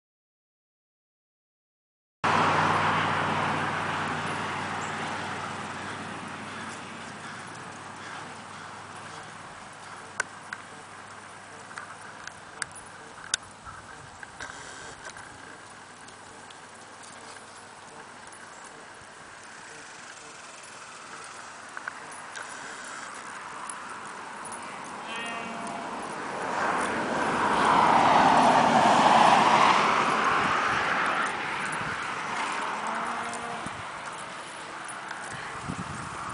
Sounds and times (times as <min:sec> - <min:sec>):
Clip-clop: 0:02.3 - 0:36.3.